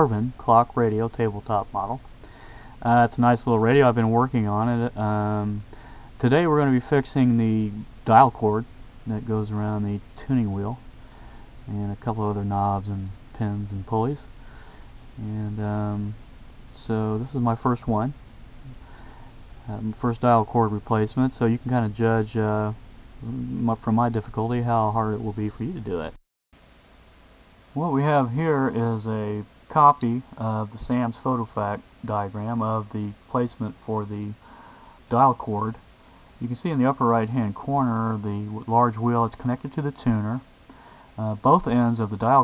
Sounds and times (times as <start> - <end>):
Speech: 0.0 - 2.0, 2.8 - 10.8, 11.7 - 14.3, 15.2 - 16.2, 16.8 - 18.8, 19.6 - 26.2, 27.8 - 34.4, 35.1 - 35.8, 36.4 - 40.4, 41.2 - 42.4.